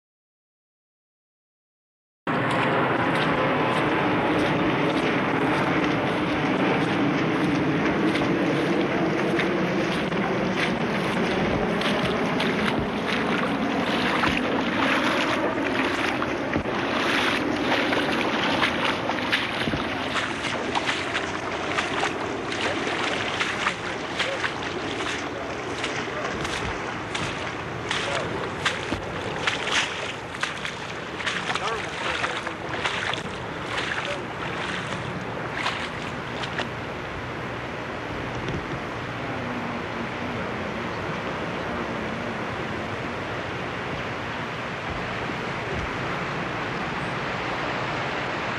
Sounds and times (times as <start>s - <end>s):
Speech: 22.5s - 29.4s, 31.5s - 33.2s, 33.8s - 34.4s.